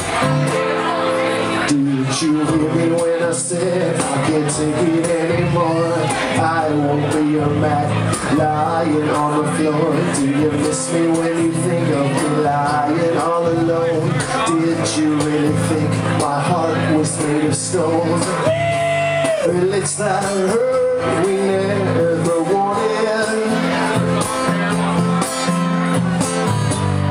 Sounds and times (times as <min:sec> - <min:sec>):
Speech: 0:00.0 - 0:18.4
Music: 0:00.0 - 0:27.1.